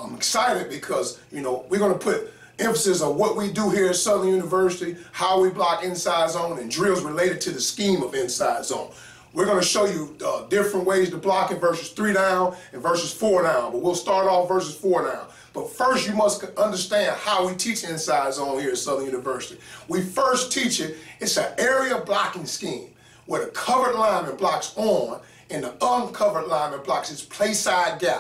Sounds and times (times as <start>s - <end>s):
Speech: 0.0s - 28.2s.